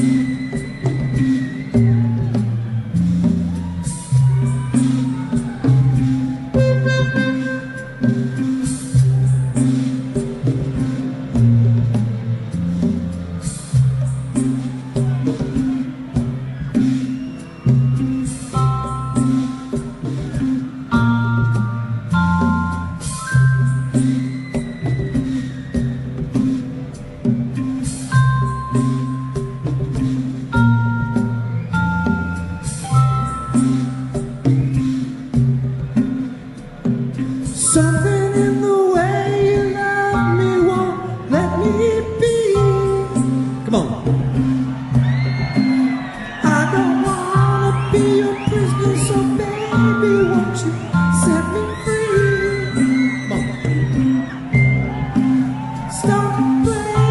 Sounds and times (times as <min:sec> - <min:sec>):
Music: 0:00.0 - 0:57.1.